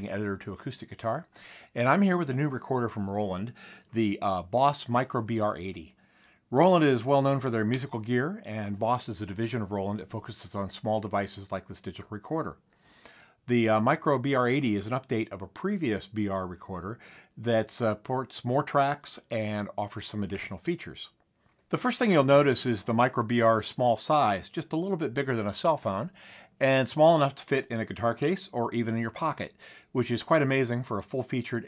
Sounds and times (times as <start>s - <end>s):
Speech: 0.0s - 12.6s, 13.5s - 31.6s.